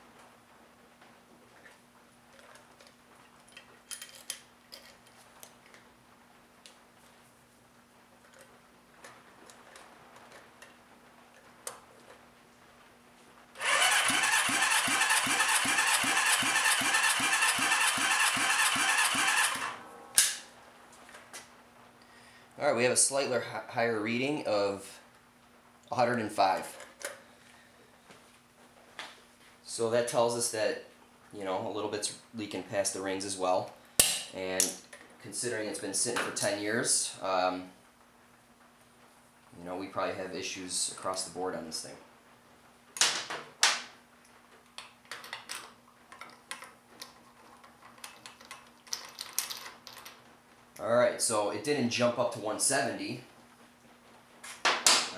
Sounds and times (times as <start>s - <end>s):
Engine: 13.6s - 19.9s
Speech: 22.6s - 25.0s, 25.9s - 26.8s, 29.7s - 37.8s, 39.6s - 42.1s, 50.8s - 53.3s.